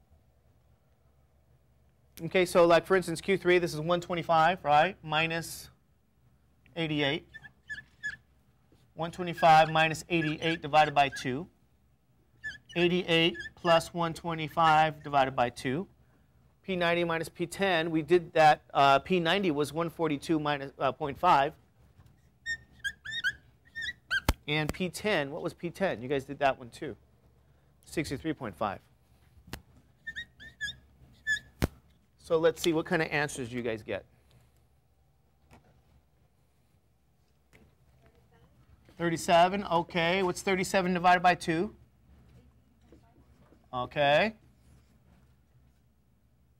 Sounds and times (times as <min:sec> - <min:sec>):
Speech: 0:02.2 - 0:05.8, 0:06.8 - 0:07.3, 0:09.0 - 0:11.5, 0:12.8 - 0:15.9, 0:16.7 - 0:21.6, 0:24.5 - 0:27.0, 0:27.9 - 0:28.9, 0:32.2 - 0:34.1, 0:38.0 - 0:41.8, 0:42.4 - 0:44.4.